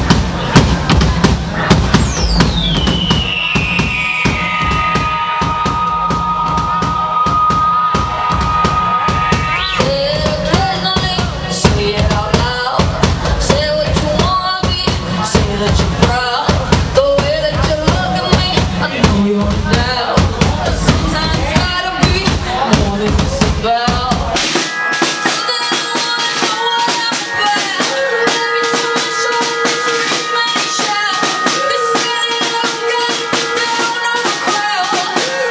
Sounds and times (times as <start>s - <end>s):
Music: 0.0s - 35.5s.